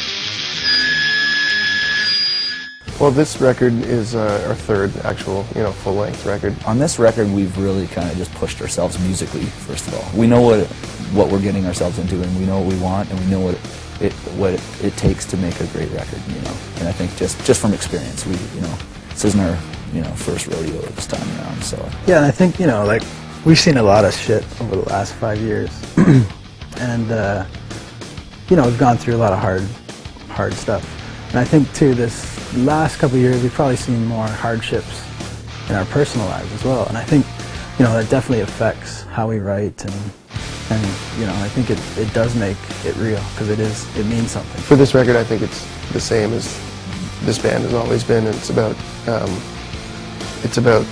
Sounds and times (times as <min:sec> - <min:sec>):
Music: 0:00.0 - 0:50.9
Speech: 0:02.9 - 0:25.8, 0:26.8 - 0:27.5, 0:28.5 - 0:35.1, 0:35.7 - 0:49.4, 0:50.4 - 0:50.9.